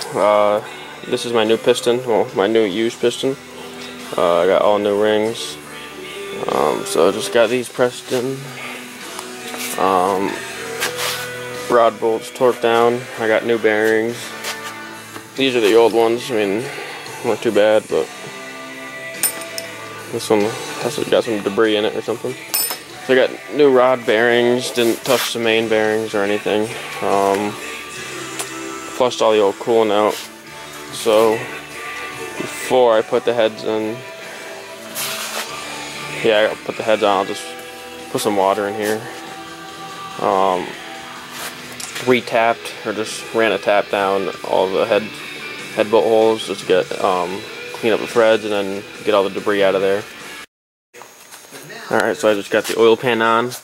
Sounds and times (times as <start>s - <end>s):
Speech: 0.0s - 3.4s, 4.1s - 5.6s, 6.4s - 8.5s, 9.8s - 10.4s, 11.7s - 14.2s, 15.4s - 18.1s, 20.1s - 22.4s, 23.1s - 27.6s, 29.0s - 30.2s, 31.0s - 31.5s, 32.5s - 34.0s, 36.2s - 37.5s, 38.1s - 39.1s, 40.2s - 40.7s, 42.0s - 45.1s, 45.8s - 50.1s, 51.5s - 53.6s
Music: 0.0s - 53.6s.